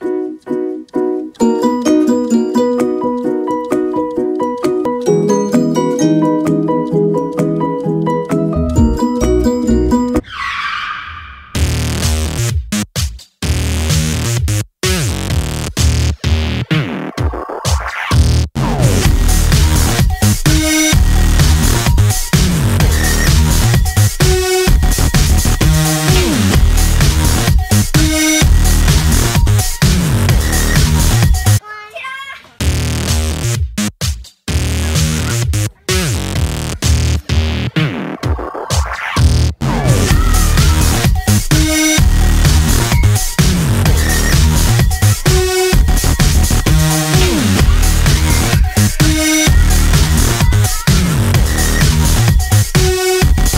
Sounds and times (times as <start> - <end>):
Music: 0.0 - 10.3, 11.6 - 31.6, 32.6 - 53.5
Speech: 31.6 - 32.6, 34.8 - 37.3, 39.9 - 41.0.